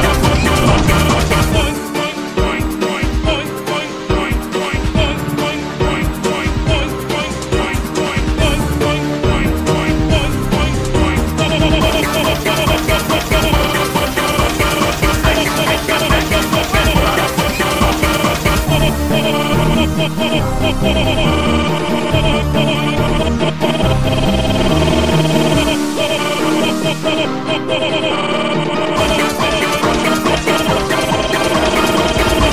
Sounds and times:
Trance music: 0.0 - 32.5.

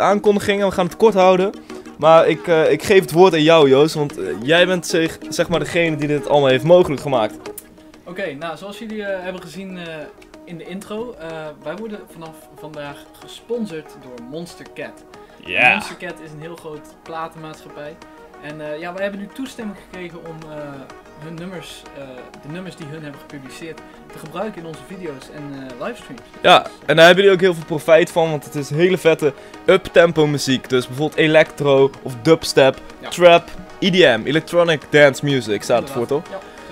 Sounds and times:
Speech: 0.0 - 7.4, 8.1 - 36.4
Music: 0.0 - 36.7.

